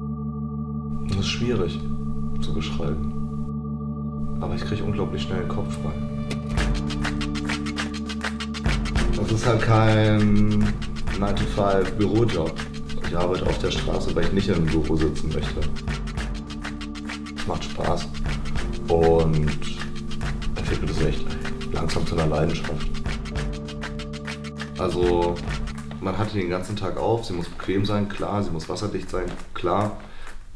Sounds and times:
Music: 0.0s - 30.3s
Speech: 1.1s - 3.1s, 4.4s - 6.1s, 9.2s - 15.8s, 17.4s - 18.2s, 18.8s - 19.9s, 20.6s - 23.0s, 24.8s - 30.1s.

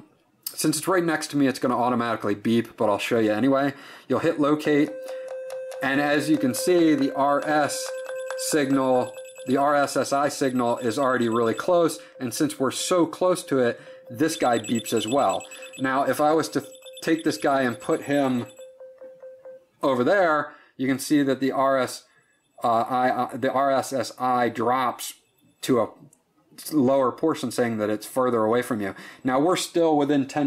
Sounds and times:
Telephone: 4.7s - 19.5s
Beep, bleep: 4.9s - 19.6s.

